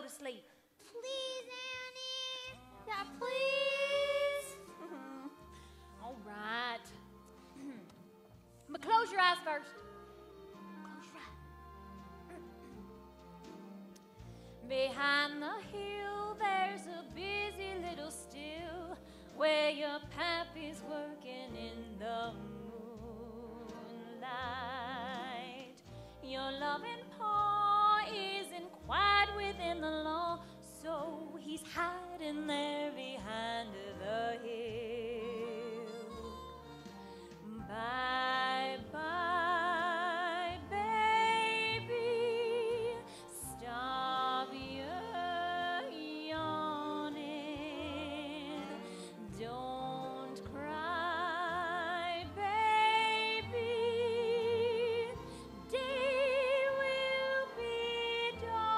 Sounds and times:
Lullaby: 0:02.0 - 0:07.0, 0:15.0 - 0:58.7.

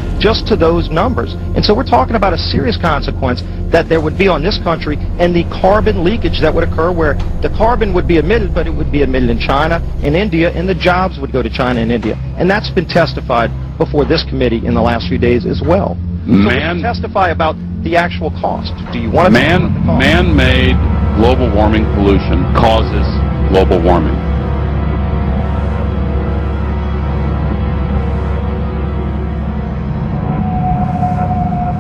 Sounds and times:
Speech: 0:00.0 - 0:24.2
Music: 0:00.0 - 0:31.8.

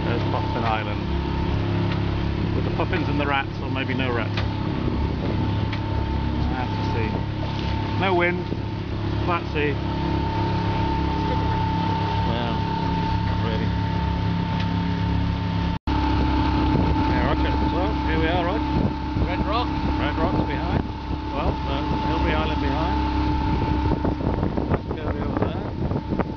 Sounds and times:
Speech: 0:00.0 - 0:01.0, 0:02.8 - 0:04.3, 0:19.3 - 0:23.0, 0:25.0 - 0:25.7
Boat, Water vehicle: 0:00.0 - 0:26.3.

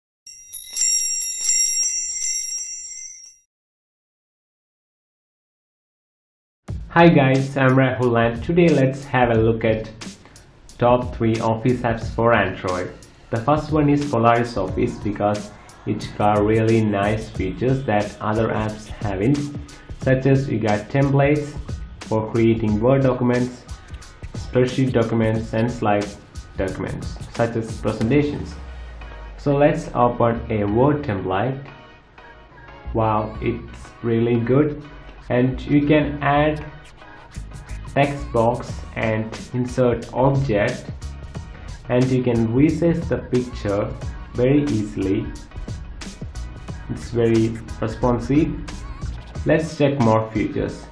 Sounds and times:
Jingle, tinkle: 0:00.3 - 0:03.5.

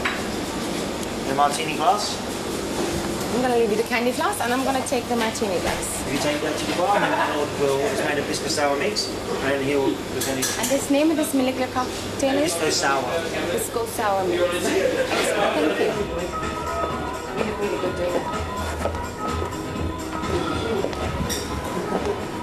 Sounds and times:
Music: 0:14.5 - 0:22.4.

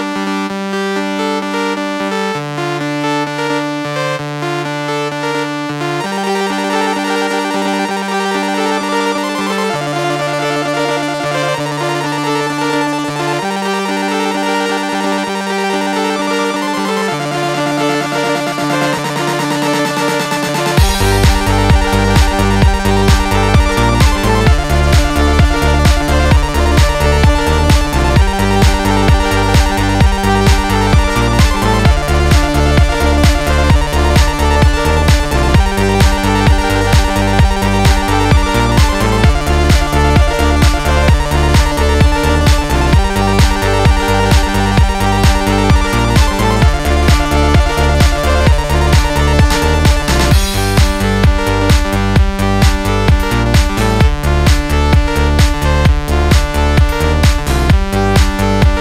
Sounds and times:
Music: 0:00.0 - 0:58.8.

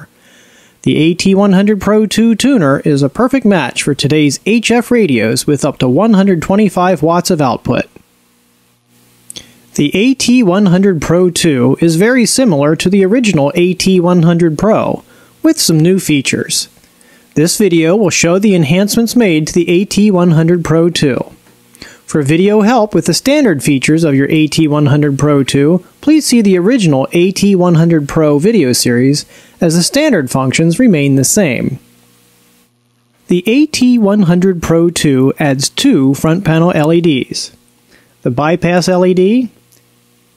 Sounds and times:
Narration, monologue: 0:00.0 - 0:40.3.

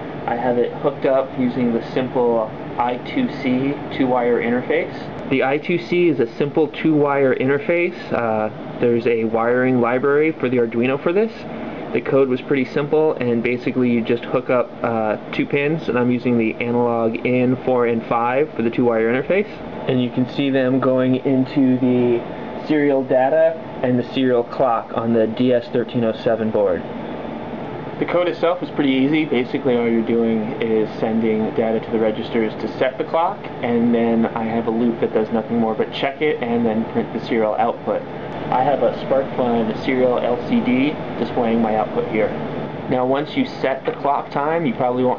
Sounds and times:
Speech: 0:00.3 - 0:26.9, 0:28.0 - 0:45.1.

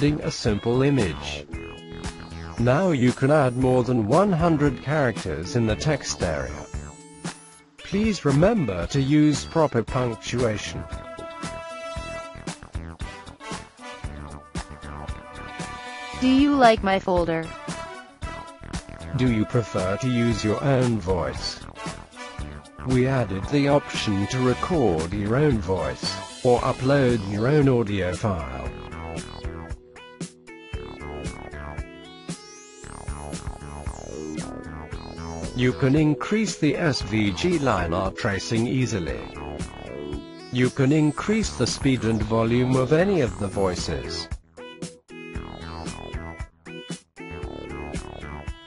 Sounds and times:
Male speech, man speaking: 0:00.0 - 0:01.5, 0:02.6 - 0:06.7, 0:07.9 - 0:11.0, 0:19.2 - 0:21.6, 0:22.9 - 0:28.8, 0:35.5 - 0:39.4, 0:40.6 - 0:44.3
Narration, monologue: 0:00.0 - 0:11.7, 0:15.8 - 0:17.7, 0:18.7 - 0:29.6, 0:35.4 - 0:39.8, 0:40.4 - 0:44.4
Music: 0:00.0 - 0:48.6.

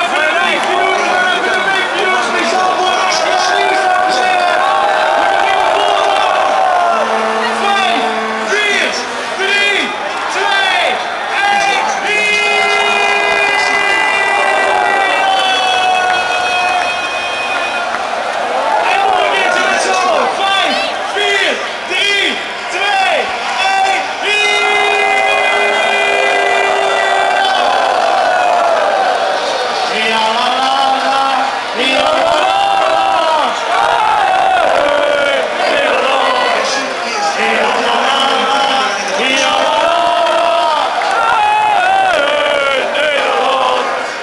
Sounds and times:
Speech: 0:00.0 - 0:15.5, 0:18.8 - 0:27.8, 0:29.8 - 0:33.9, 0:34.5 - 0:44.0
Male singing: 0:29.9 - 0:33.4, 0:34.7 - 0:40.9.

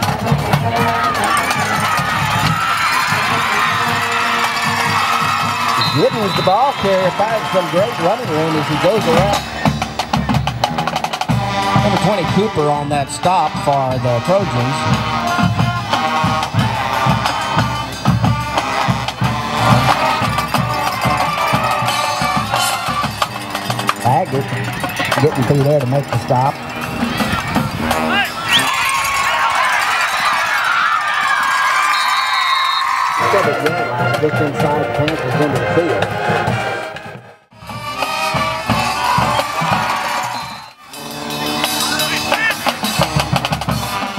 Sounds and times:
Music: 0:00.0 - 0:31.9, 0:33.2 - 0:44.1
Speech: 0:06.0 - 0:09.5, 0:11.8 - 0:15.5, 0:24.0 - 0:26.6, 0:33.2 - 0:36.1.

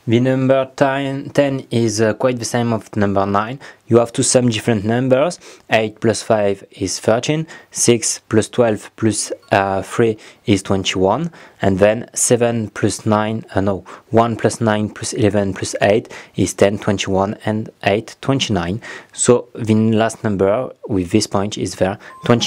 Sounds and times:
Speech: 0:00.0 - 0:22.4.

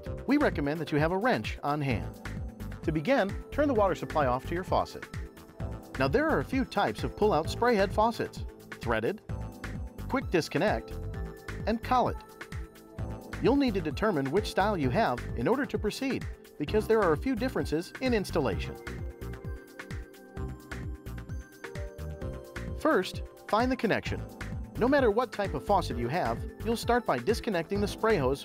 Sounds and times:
Music: 0:00.0 - 0:28.4
Speech: 0:00.3 - 0:02.1, 0:02.9 - 0:05.0, 0:06.0 - 0:09.2, 0:10.1 - 0:10.8, 0:11.7 - 0:12.2, 0:13.4 - 0:18.8, 0:22.8 - 0:24.2, 0:24.8 - 0:28.4.

